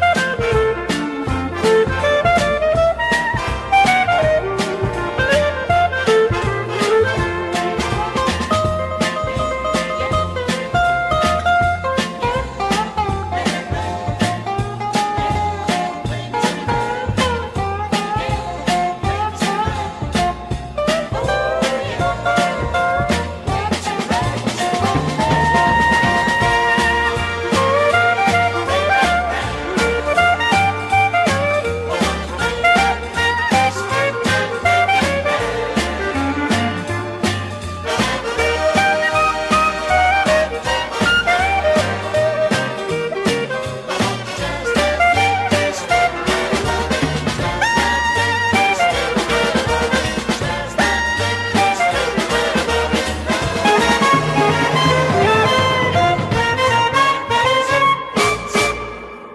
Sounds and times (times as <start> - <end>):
Funk: 0.0 - 59.2
Soul music: 0.0 - 59.3.